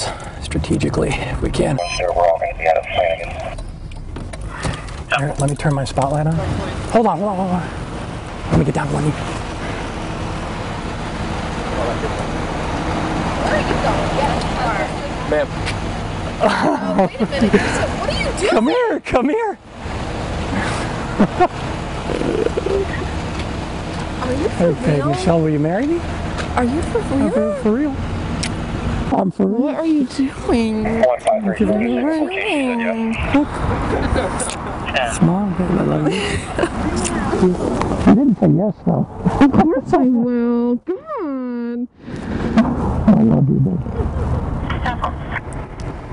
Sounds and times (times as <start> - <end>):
Speech: 0.0 - 3.6, 5.1 - 7.7, 22.1 - 23.0, 24.2 - 26.0, 26.6 - 28.0, 29.1 - 36.2, 36.8 - 41.9, 43.1 - 43.9.